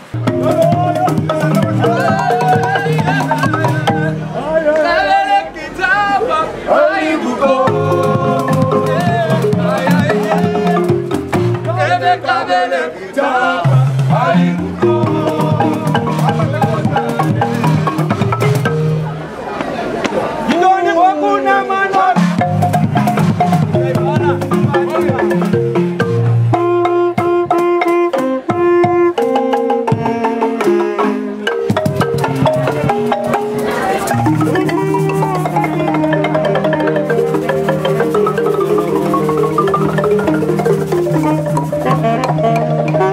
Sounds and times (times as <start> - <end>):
Drum: 0.1 - 4.3, 7.6 - 12.1, 13.6 - 19.1, 22.2 - 30.8, 31.6 - 43.1.